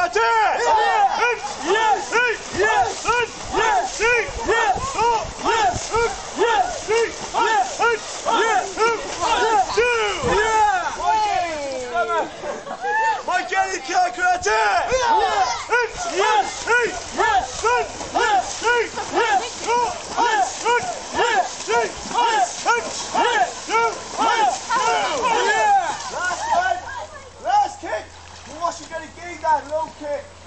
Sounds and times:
Speech: 0:00.0 - 0:12.4, 0:13.0 - 0:30.3
Stream: 0:00.0 - 0:30.4
Gurgling: 0:00.6 - 0:11.3, 0:15.0 - 0:26.5.

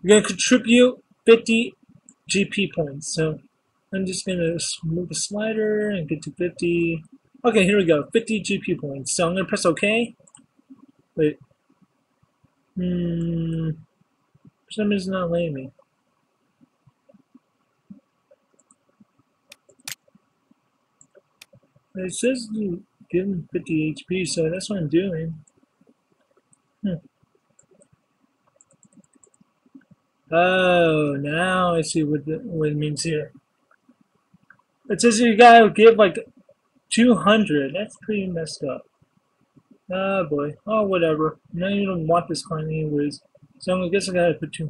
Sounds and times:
Speech: 0:00.0 - 0:10.2, 0:11.2 - 0:11.4, 0:12.8 - 0:13.8, 0:14.7 - 0:15.7, 0:22.0 - 0:25.4, 0:26.8 - 0:27.0, 0:30.3 - 0:33.4, 0:34.9 - 0:36.3, 0:36.9 - 0:38.9, 0:39.9 - 0:44.7
Clicking: 0:02.0 - 0:02.2, 0:10.2 - 0:10.9, 0:16.6 - 0:20.2, 0:21.0 - 0:21.8, 0:25.4 - 0:26.7, 0:27.4 - 0:30.0, 0:33.3 - 0:34.7.

